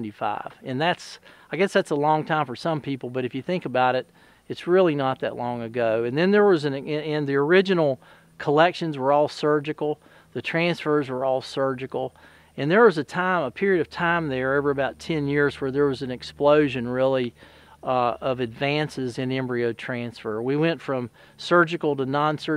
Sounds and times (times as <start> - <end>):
Speech: 0.0 - 22.5.